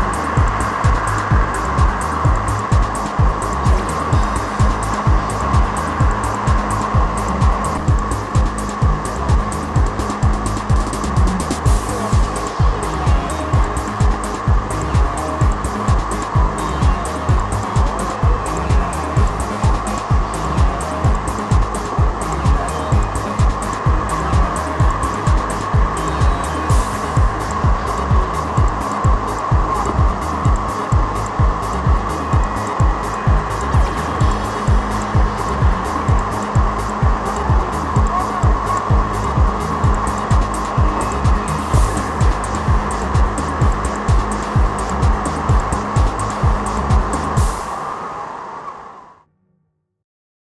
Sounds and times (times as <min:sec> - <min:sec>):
Music: 0:00.0 - 0:50.0.